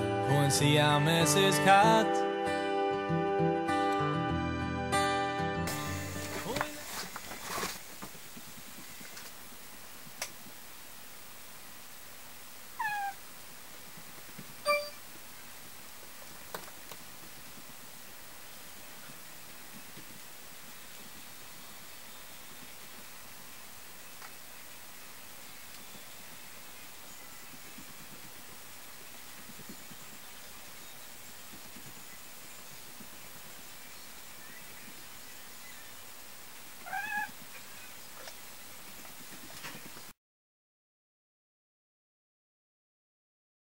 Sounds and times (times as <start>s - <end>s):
Meow: 12.8s - 13.2s, 36.8s - 37.4s.